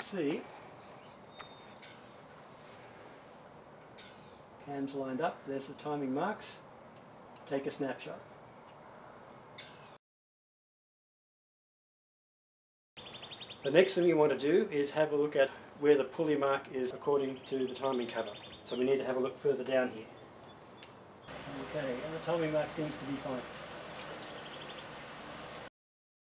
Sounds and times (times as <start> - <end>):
Speech: 0.0 - 0.5, 4.6 - 6.7, 7.5 - 8.3, 13.6 - 20.1, 21.4 - 23.5.